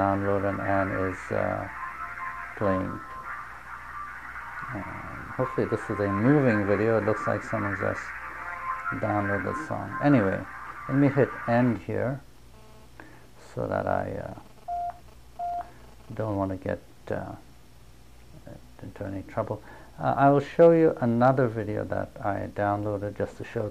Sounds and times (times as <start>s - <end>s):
Speech: 0.0s - 1.7s, 2.6s - 3.0s, 4.7s - 8.2s, 8.9s - 12.3s, 13.4s - 14.4s, 16.1s - 17.5s, 18.4s - 23.7s
Inside, small room: 0.0s - 23.7s
Music: 0.2s - 11.7s.